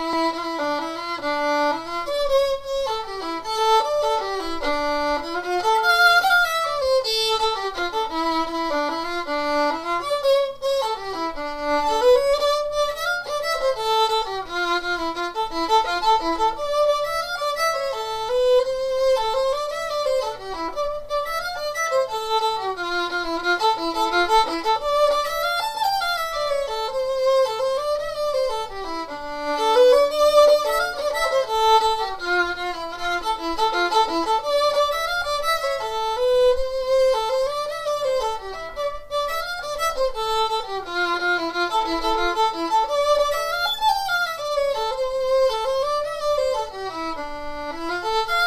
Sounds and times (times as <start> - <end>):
Violin, fiddle: 0.0 - 48.4.